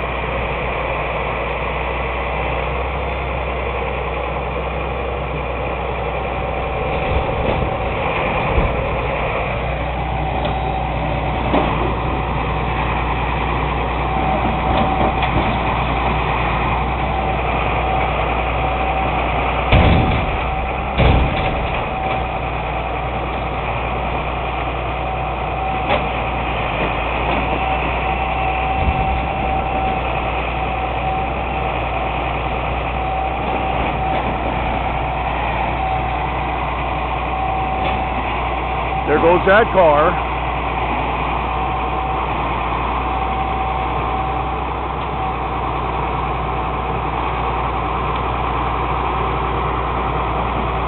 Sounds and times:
Vehicle: 0:00.0 - 0:50.8.

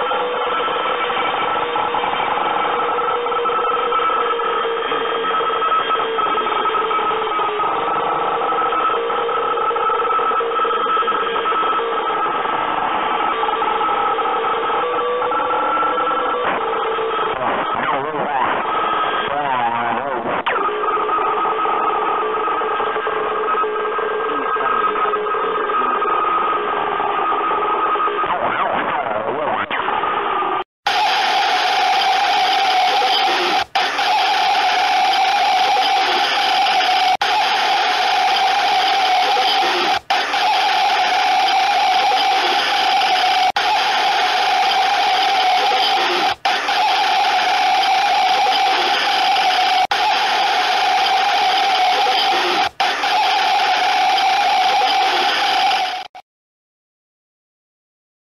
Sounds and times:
Radio: 0:00.0 - 0:30.0, 0:30.9 - 0:56.2.

